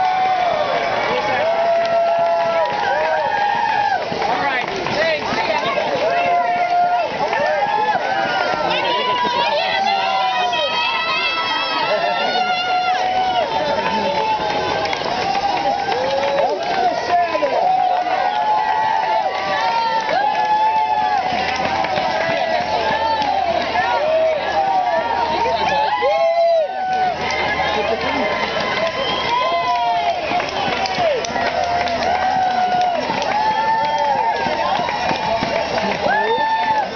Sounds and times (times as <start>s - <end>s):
Cheering: 0.0s - 36.9s
Crowd: 0.0s - 36.9s.